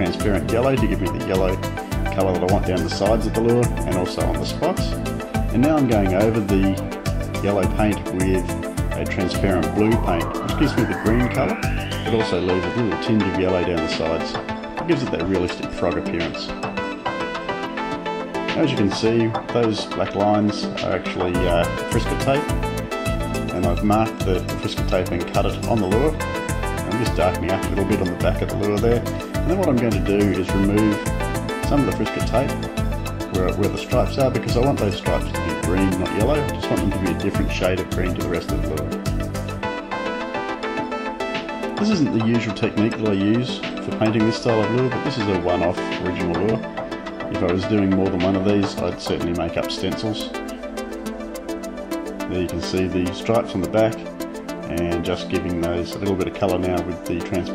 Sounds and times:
Speech: 0:00.0 - 0:06.8, 0:07.4 - 0:16.6, 0:18.5 - 0:22.5, 0:23.5 - 0:26.2, 0:26.8 - 0:31.0, 0:31.7 - 0:32.7, 0:33.3 - 0:38.9, 0:41.8 - 0:46.6, 0:47.3 - 0:50.4, 0:52.3 - 0:54.1, 0:54.7 - 0:57.5
Music: 0:00.0 - 0:57.5.

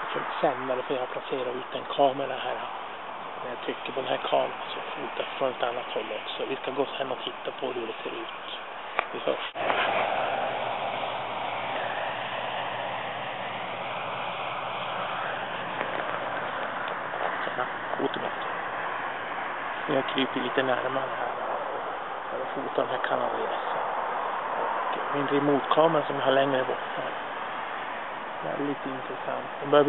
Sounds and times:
Speech: 0:00.0 - 0:02.6, 0:03.4 - 0:09.6, 0:17.4 - 0:18.5, 0:19.9 - 0:21.4, 0:22.3 - 0:23.8, 0:25.0 - 0:27.1, 0:28.4 - 0:29.8.

